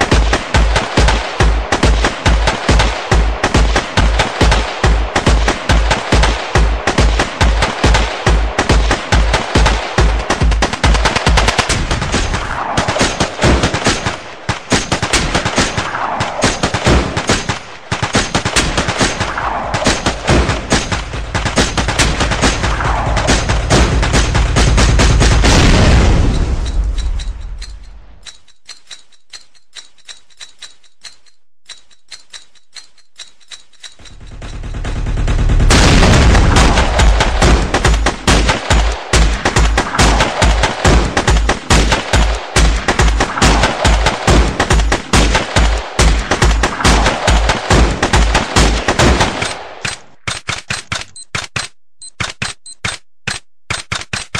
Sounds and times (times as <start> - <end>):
Sound effect: 11.2 - 14.1, 19.1 - 42.4
Soundtrack music: 21.0 - 25.5.